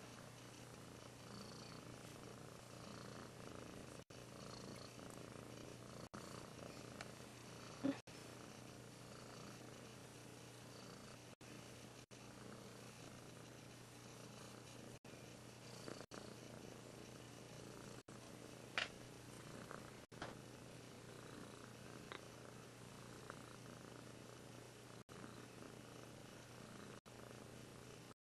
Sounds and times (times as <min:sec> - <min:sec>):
Purr: 0:00.0 - 0:11.4, 0:12.1 - 0:18.1, 0:18.8 - 0:28.2.